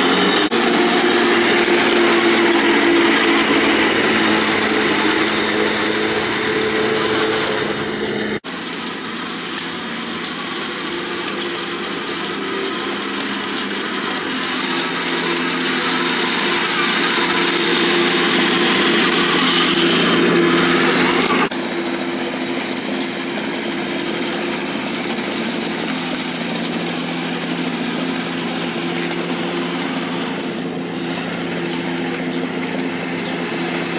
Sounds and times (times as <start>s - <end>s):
Engine knocking: 0.0s - 33.9s
Power tool: 0.0s - 33.9s.